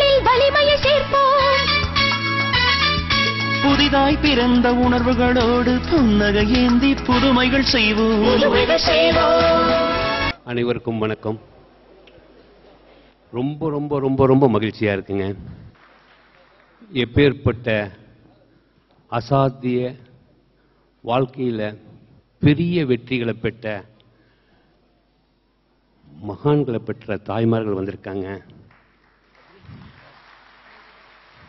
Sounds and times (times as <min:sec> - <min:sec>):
Music: 0:00.0 - 0:10.4
Male speech, man speaking: 0:10.4 - 0:11.5, 0:13.3 - 0:15.4, 0:16.8 - 0:18.1, 0:19.1 - 0:20.2, 0:21.1 - 0:23.9, 0:26.1 - 0:28.5
Narration, monologue: 0:10.4 - 0:11.7, 0:13.2 - 0:15.8, 0:16.8 - 0:28.7.